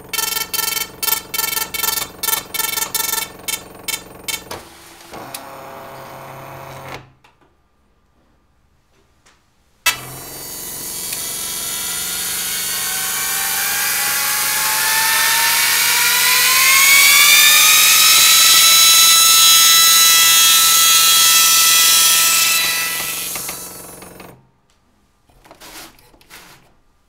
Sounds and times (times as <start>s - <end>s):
Printer: 0.1s - 7.1s, 9.9s - 24.4s.